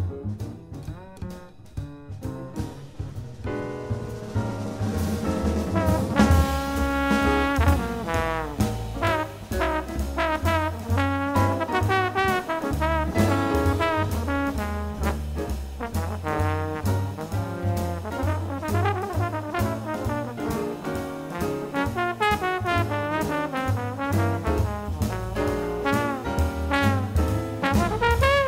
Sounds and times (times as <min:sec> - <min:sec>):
Classical music: 0:00.0 - 0:28.4
Trombone: 0:00.2 - 0:28.4.